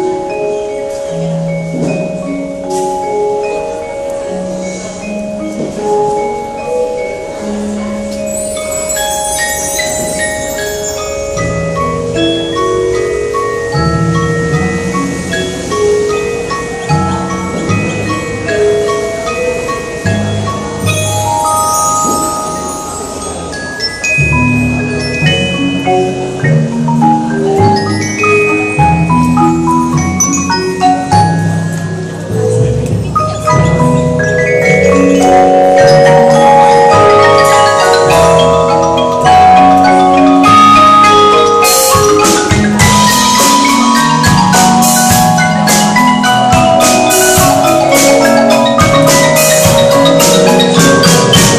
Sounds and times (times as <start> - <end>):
Percussion: 0.0 - 51.5.